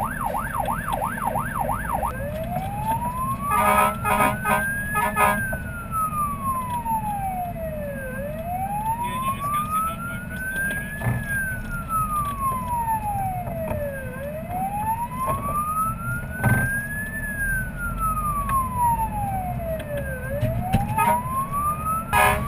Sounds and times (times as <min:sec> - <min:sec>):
Fire engine, fire truck (siren): 0:00.0 - 0:22.4.